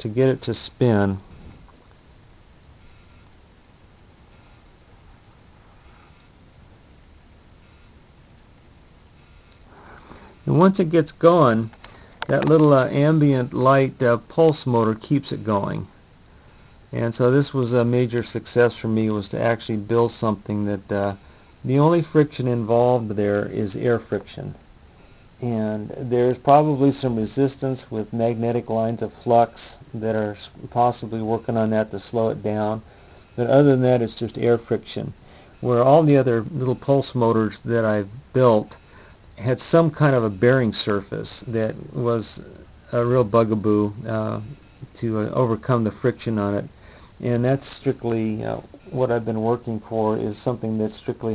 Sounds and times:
Speech: 0.0s - 1.2s, 10.4s - 15.9s, 16.9s - 24.6s, 25.4s - 38.8s, 39.4s - 51.3s.

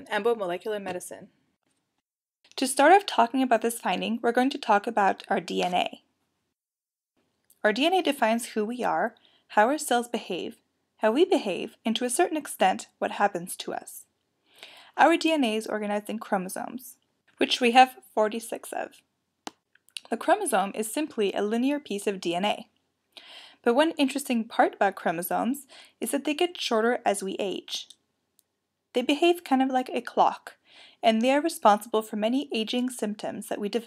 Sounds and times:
Speech: 0.0s - 1.3s, 2.6s - 6.0s, 7.6s - 14.0s, 14.9s - 19.0s, 20.0s - 22.7s, 23.6s - 27.9s, 29.0s - 33.8s.

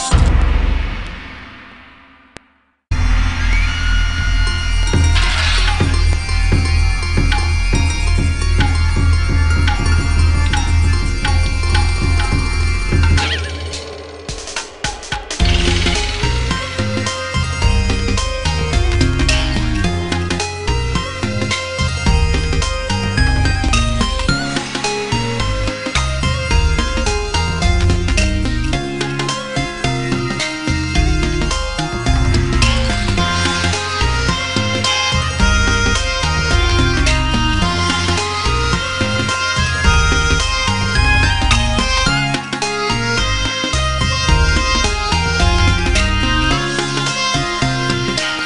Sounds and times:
Music: 0.0s - 48.4s.

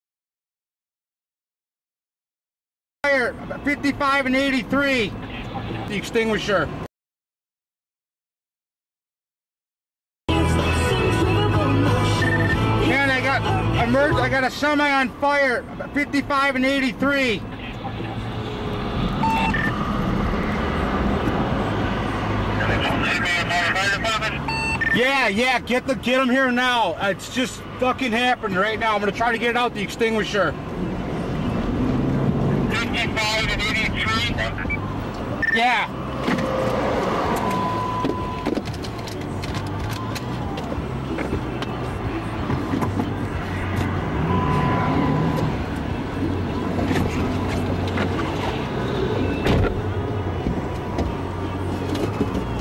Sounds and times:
Speech: 3.0s - 6.8s, 12.8s - 18.2s, 22.6s - 30.6s, 32.7s - 34.7s, 35.4s - 35.9s
Vehicle: 3.0s - 6.9s, 10.3s - 52.6s.

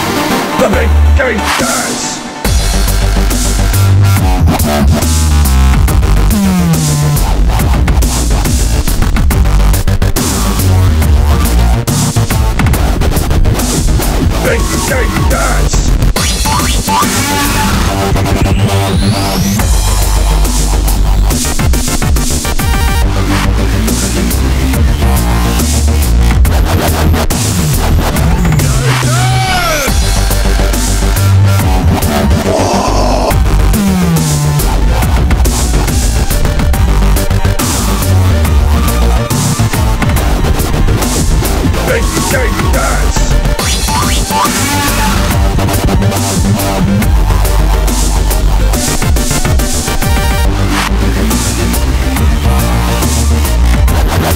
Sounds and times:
Dubstep: 0.0s - 54.3s
Electronic dance music: 0.0s - 54.3s.

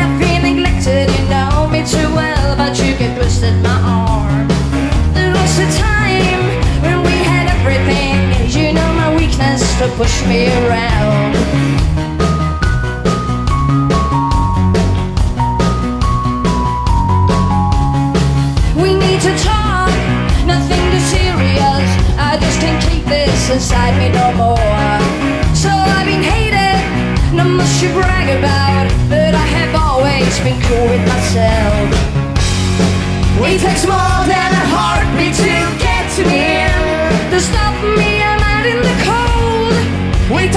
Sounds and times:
Music: 0.0s - 40.5s.

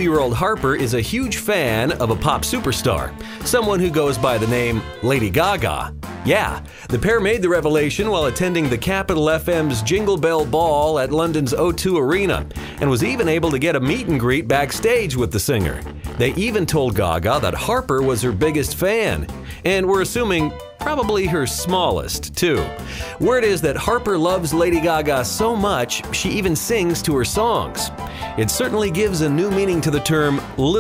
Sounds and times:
Music: 0.0s - 30.8s
Speech: 0.0s - 30.8s.

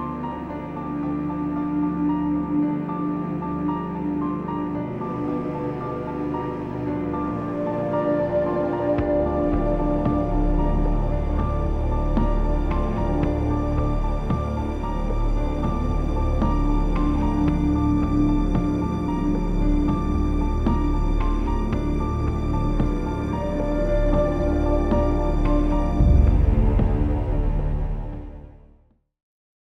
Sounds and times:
Music: 0.0s - 29.2s.

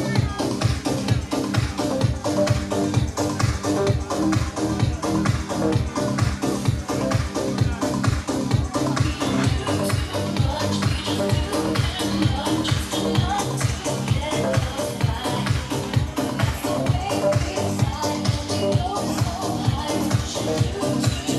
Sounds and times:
Dance music: 0.0s - 21.3s.

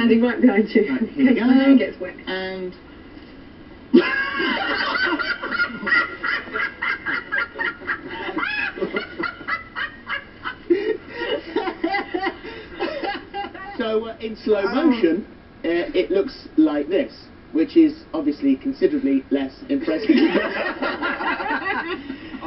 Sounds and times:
Snicker: 4.0s - 13.8s, 20.0s - 22.2s.

